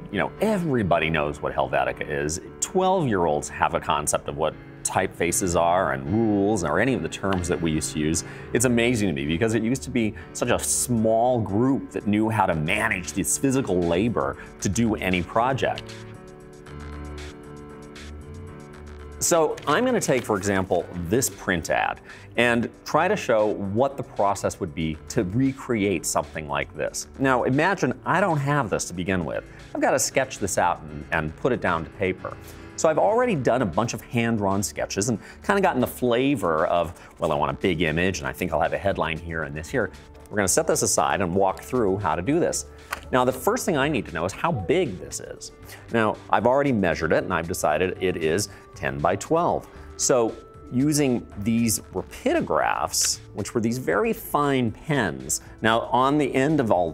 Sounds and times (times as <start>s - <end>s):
Music: 0.0s - 56.9s
Speech: 0.1s - 15.8s, 19.2s - 56.9s.